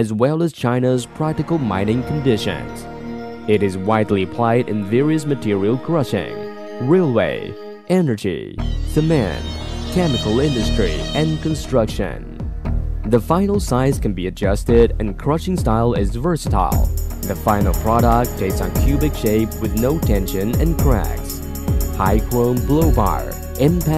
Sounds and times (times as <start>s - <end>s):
Speech: 0.0s - 2.8s, 3.5s - 12.4s, 13.1s - 21.4s, 22.0s - 23.9s
Music: 1.0s - 8.0s, 8.6s - 23.9s.